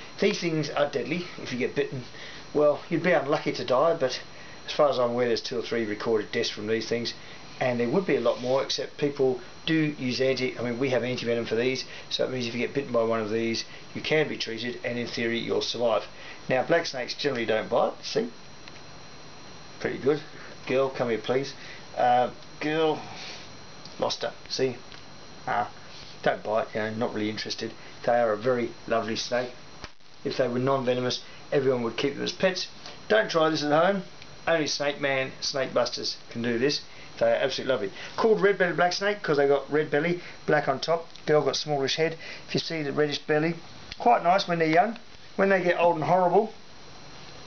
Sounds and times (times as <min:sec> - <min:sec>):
Inside, small room: 0:00.0 - 0:47.4
Speech: 0:00.2 - 0:18.4, 0:19.8 - 0:23.2, 0:24.0 - 0:24.8, 0:25.5 - 0:29.6, 0:30.2 - 0:46.6.